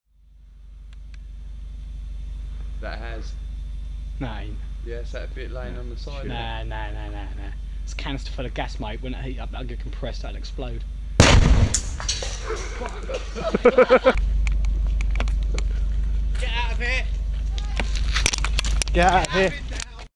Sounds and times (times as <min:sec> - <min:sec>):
Speech: 0:02.8 - 0:03.4, 0:04.2 - 0:10.8, 0:19.0 - 0:20.1
Burst, pop: 0:11.2 - 0:12.2.